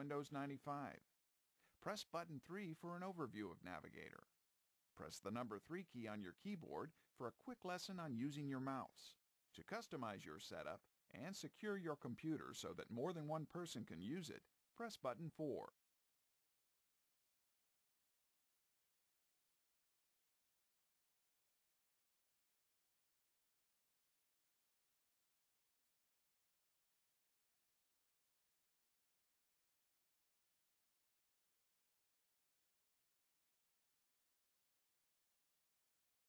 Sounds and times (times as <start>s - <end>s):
Speech: 0.0s - 1.1s, 1.7s - 4.4s, 5.0s - 15.8s.